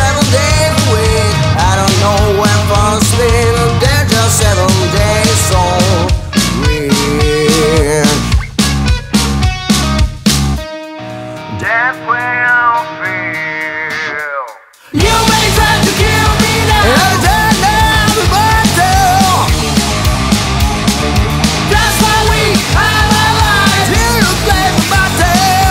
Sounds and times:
Music: 0:00.0 - 0:25.7.

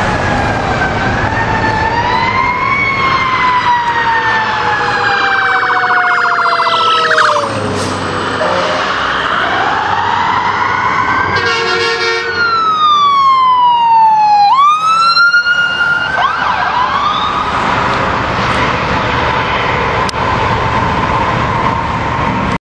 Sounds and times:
Police car (siren): 0:00.0 - 0:19.8.

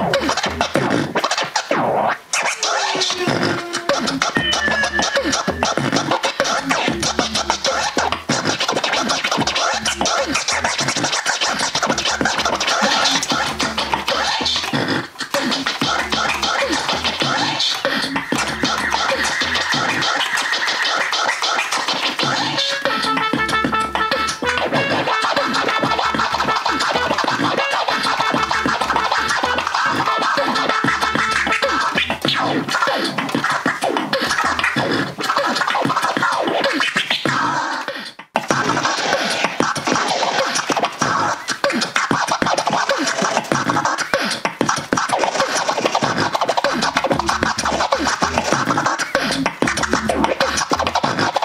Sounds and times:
Beatboxing: 0:00.0 - 0:51.4
Scratching (performance technique): 0:00.0 - 0:51.4.

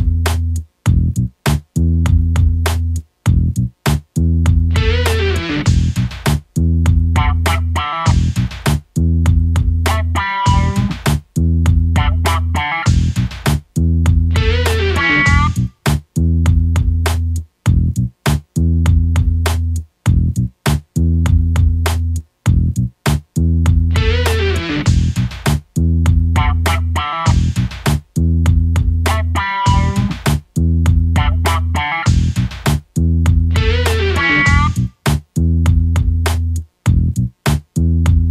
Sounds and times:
Funny music: 0:00.0 - 0:38.3.

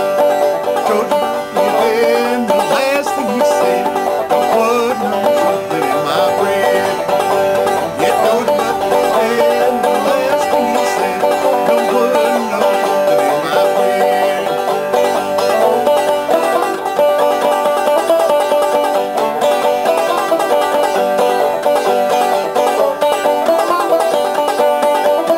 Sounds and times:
Banjo: 0:00.0 - 0:25.3.

